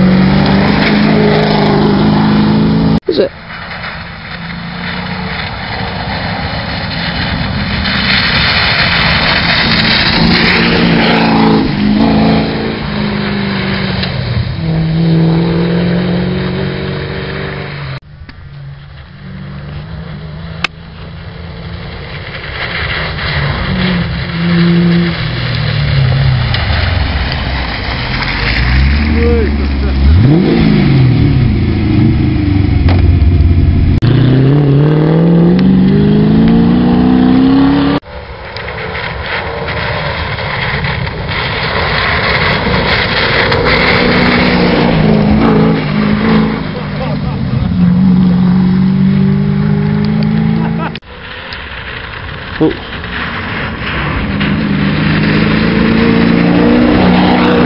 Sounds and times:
Speech: 3.1 - 3.3, 29.2 - 30.1, 46.8 - 47.4, 52.6 - 52.8.

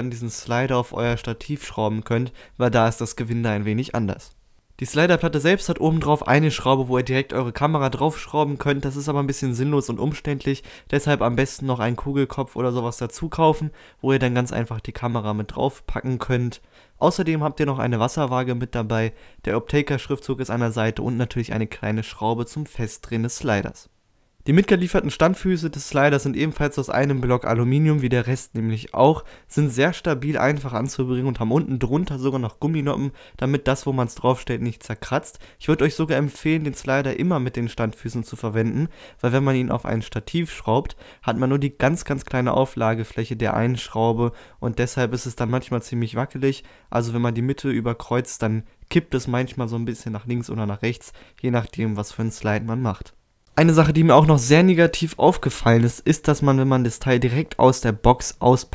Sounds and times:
Speech: 0.0 - 58.7.

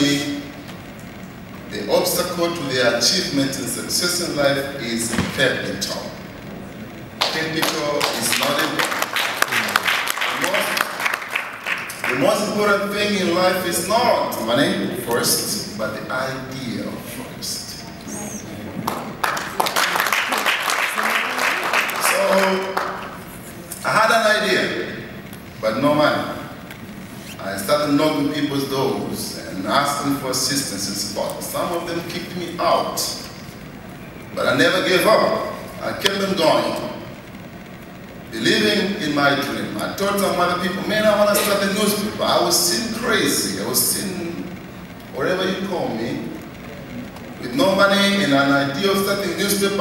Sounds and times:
Male speech, man speaking: 0.0 - 0.5, 1.7 - 6.2, 7.2 - 11.0, 12.0 - 17.9, 22.0 - 22.9, 23.8 - 26.5, 27.4 - 33.3, 34.4 - 37.1, 38.4 - 44.5, 45.2 - 46.4, 47.4 - 49.8
Narration, monologue: 0.0 - 18.8, 21.9 - 49.8.

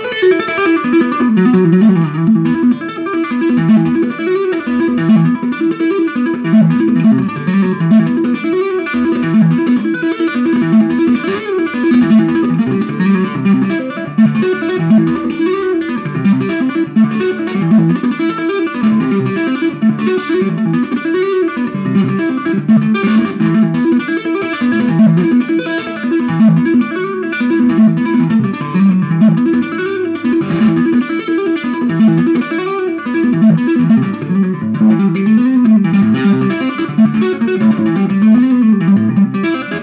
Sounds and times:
Tapping (guitar technique): 0.0 - 39.8.

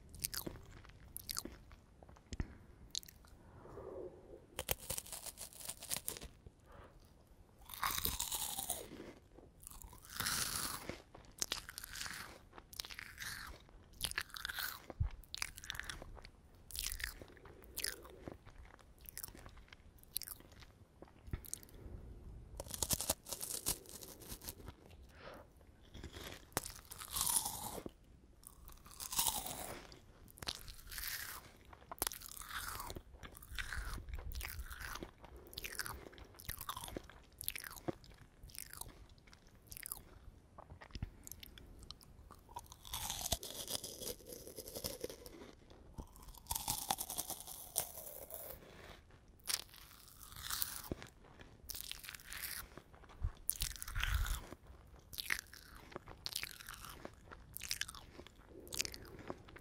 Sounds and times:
Crunch: 0.0 - 59.6.

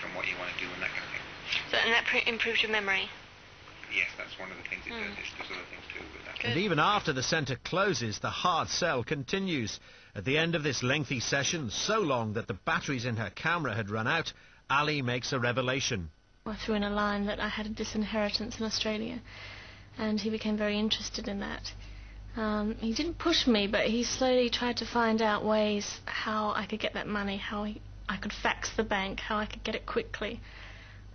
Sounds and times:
Speech: 0.0 - 3.2, 3.9 - 19.2
Inside, small room: 0.0 - 31.1.

